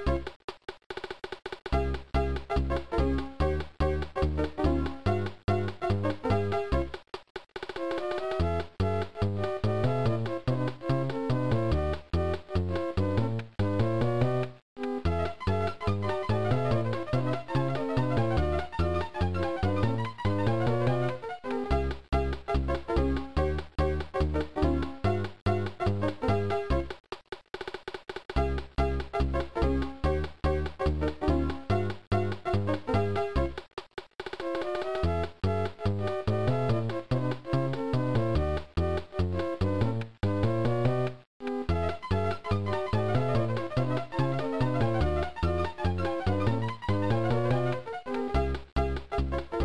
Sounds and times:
Video game music: 0.0 - 0.4, 1.0 - 27.0, 28.3 - 49.6.

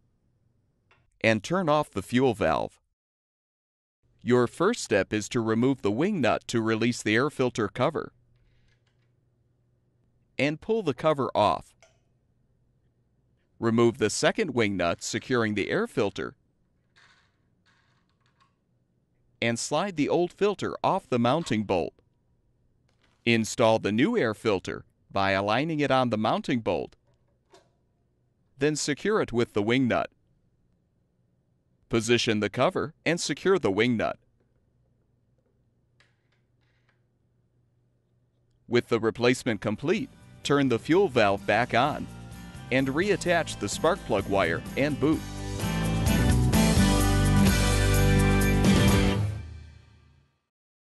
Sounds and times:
Speech: 1.2 - 2.8, 4.2 - 8.1, 10.4 - 11.7, 13.6 - 16.4, 19.4 - 22.0, 23.3 - 27.0, 28.6 - 30.1, 31.9 - 34.2, 38.7 - 42.1, 42.7 - 45.2.

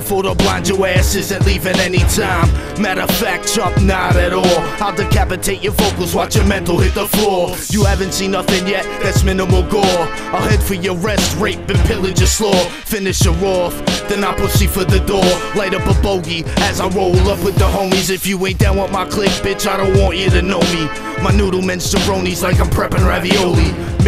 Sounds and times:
Music: 0.0 - 24.0.

